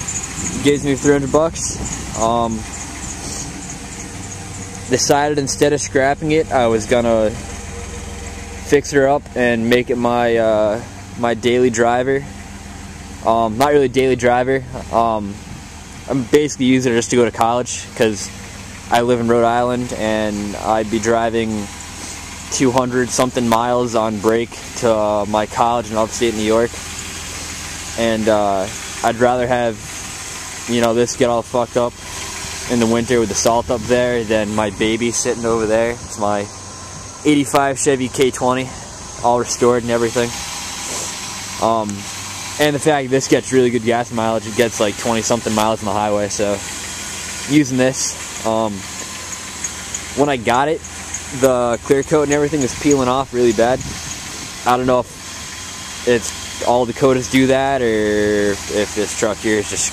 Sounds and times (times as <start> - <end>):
Speech: 0.4 - 3.5, 4.9 - 7.4, 8.6 - 12.3, 13.2 - 15.4, 16.1 - 21.8, 22.5 - 26.8, 28.0 - 29.9, 30.7 - 32.0, 32.7 - 36.5, 37.2 - 40.4, 41.6 - 46.6, 47.5 - 48.9, 50.2 - 53.8, 54.6 - 55.2, 56.1 - 59.9.